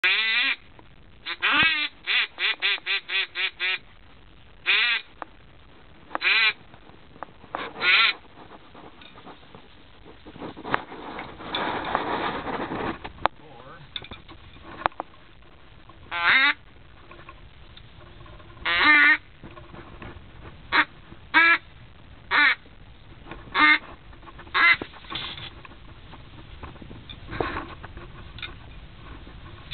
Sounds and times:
Quack: 0.0 - 0.6, 1.3 - 3.8, 4.7 - 5.1, 6.2 - 6.6, 7.6 - 8.2, 16.1 - 16.6, 18.6 - 19.2, 20.7 - 21.6, 22.3 - 22.6, 23.5 - 23.8, 24.5 - 24.9.

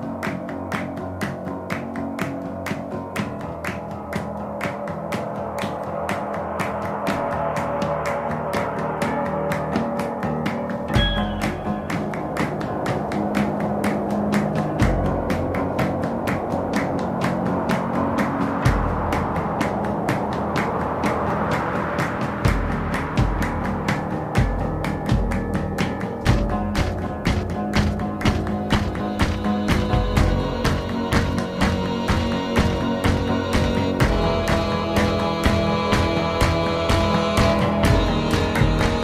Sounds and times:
Music: 0.0 - 39.0.

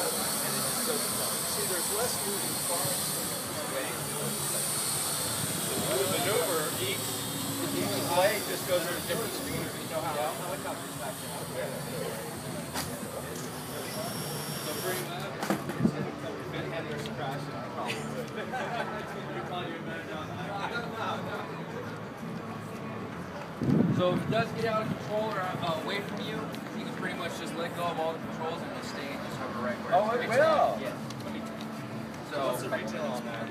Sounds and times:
Speech: 0.0 - 4.8, 5.5 - 31.6, 32.2 - 33.5.

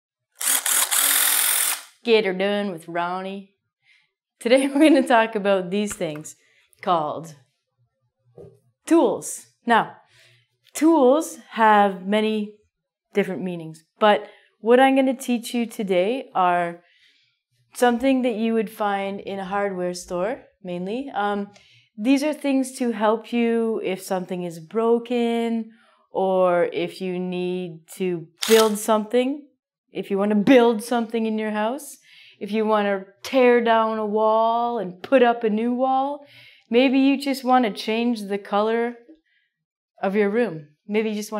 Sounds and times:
Power tool: 0.4 - 2.0, 28.4 - 28.7.

